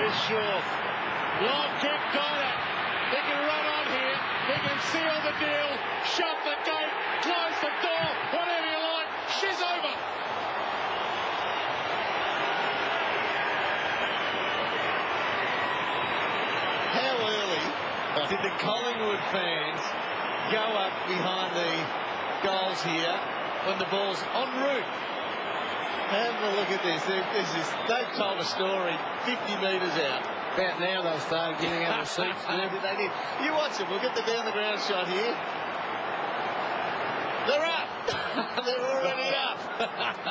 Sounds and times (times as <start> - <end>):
Speech: 0.0 - 0.7, 1.4 - 10.0, 16.9 - 19.9, 20.5 - 24.9, 26.1 - 35.4, 37.5 - 39.6.